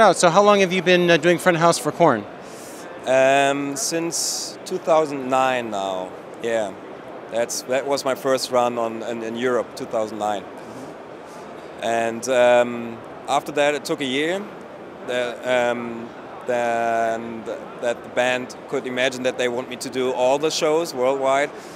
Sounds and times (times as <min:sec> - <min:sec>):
Speech: 0:03.1 - 0:06.8, 0:07.4 - 0:10.4, 0:11.8 - 0:14.5, 0:15.1 - 0:21.5.